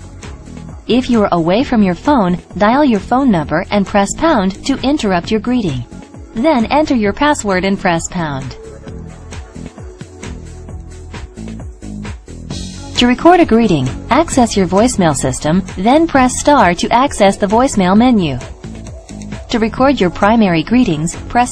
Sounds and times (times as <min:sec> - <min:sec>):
Music: 0:00.0 - 0:21.5
Speech: 0:00.9 - 0:08.6, 0:13.0 - 0:18.5, 0:19.5 - 0:21.5.